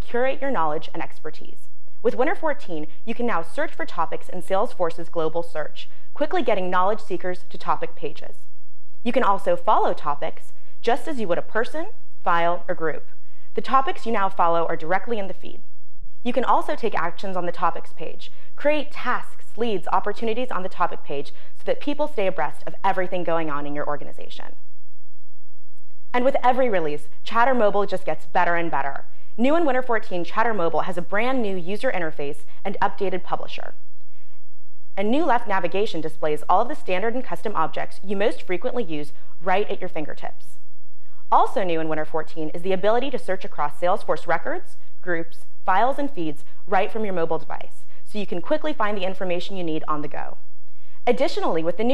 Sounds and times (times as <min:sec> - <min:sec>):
Speech: 0:00.0 - 0:08.4, 0:09.1 - 0:15.6, 0:16.3 - 0:24.6, 0:26.2 - 0:33.8, 0:35.0 - 0:40.6, 0:41.3 - 0:50.4, 0:51.1 - 0:51.9.